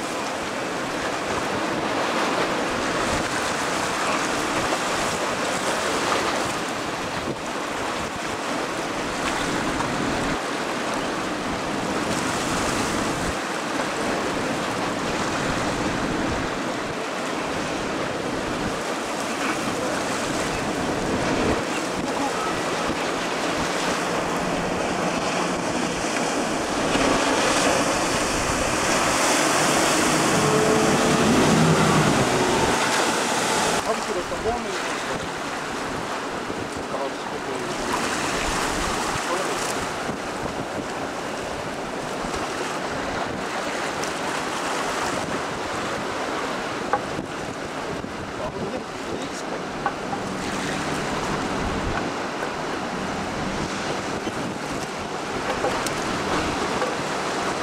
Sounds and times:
Motorboat, speedboat: 0.0s - 57.6s
Waves, surf: 0.0s - 57.6s
Wind noise (microphone): 0.8s - 13.4s, 14.0s - 32.9s, 37.7s - 57.6s.

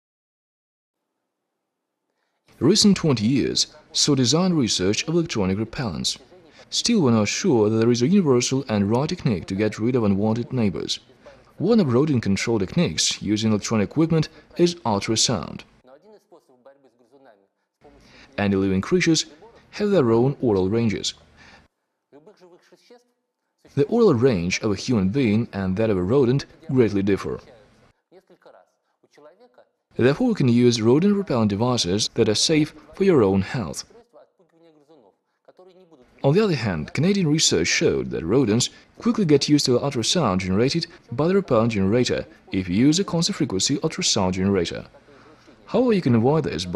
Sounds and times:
Speech: 2.6s - 21.3s, 22.2s - 23.1s, 23.7s - 46.7s.

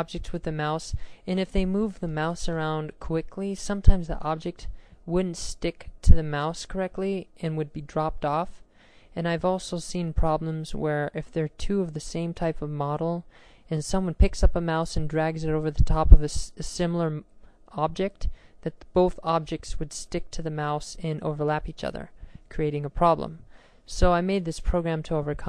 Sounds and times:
Speech: 0.0s - 8.6s, 9.2s - 25.4s.

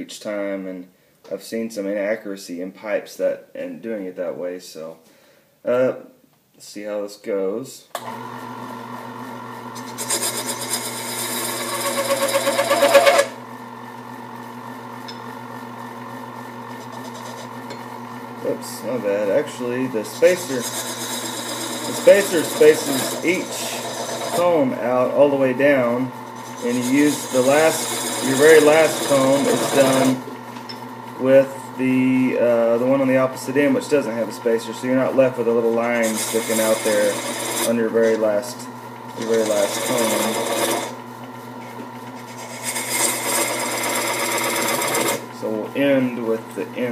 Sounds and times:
Speech: 0.0s - 5.0s, 5.6s - 8.0s, 18.4s - 20.8s, 21.9s - 30.3s, 31.2s - 40.5s, 45.4s - 46.9s.

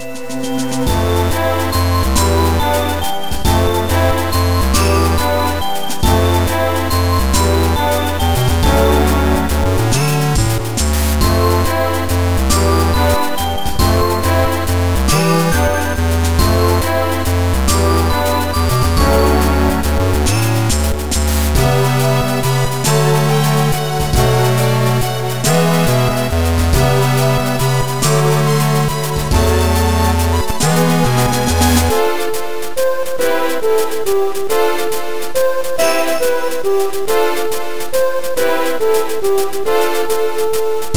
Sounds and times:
Music: 0.0s - 40.9s.

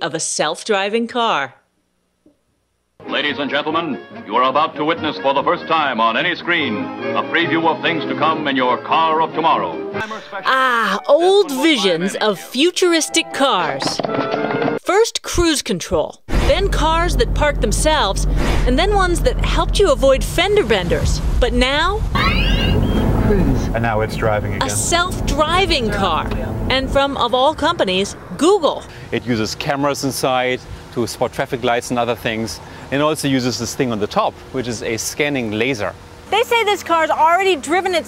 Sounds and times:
Music: 3.0s - 14.8s, 24.1s - 28.9s
Speech: 3.1s - 14.0s, 14.9s - 22.0s, 23.3s - 38.0s.

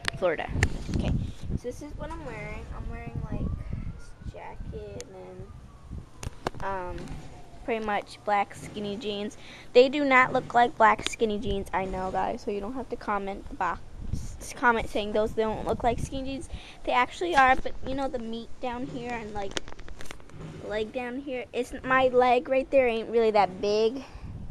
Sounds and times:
Speech: 0.0s - 5.5s, 6.6s - 7.1s, 7.7s - 19.5s, 20.6s - 24.1s.

